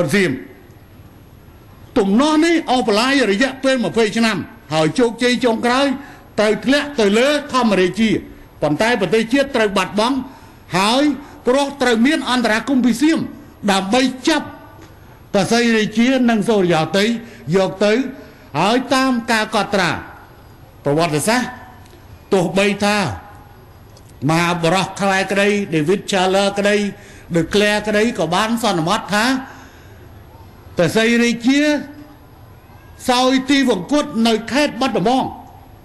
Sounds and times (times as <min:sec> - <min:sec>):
Male speech, man speaking: 0:00.0 - 0:00.6, 0:02.0 - 0:14.6, 0:15.4 - 0:20.2, 0:20.9 - 0:21.7, 0:22.3 - 0:23.3, 0:24.2 - 0:29.5, 0:30.8 - 0:32.0, 0:33.0 - 0:35.5
Narration, monologue: 0:00.0 - 0:35.8.